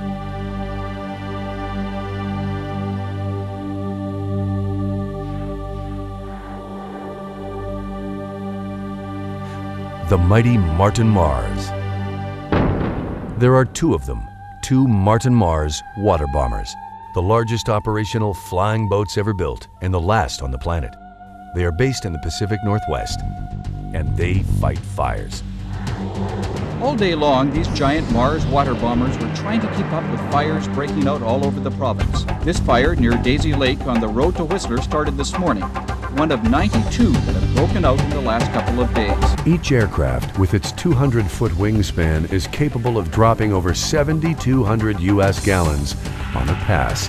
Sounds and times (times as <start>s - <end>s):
Music: 0.0s - 47.0s
Speech: 10.0s - 11.7s, 13.4s - 21.0s, 21.6s - 23.2s, 24.0s - 25.4s, 26.8s - 47.0s.